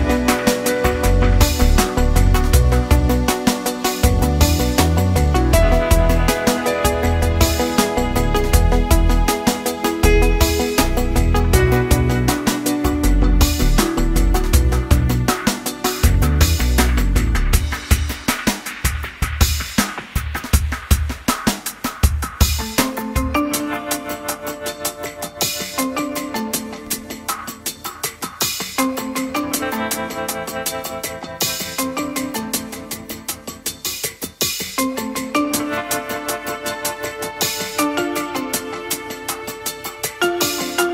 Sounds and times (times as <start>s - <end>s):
Music: 0.0s - 40.9s.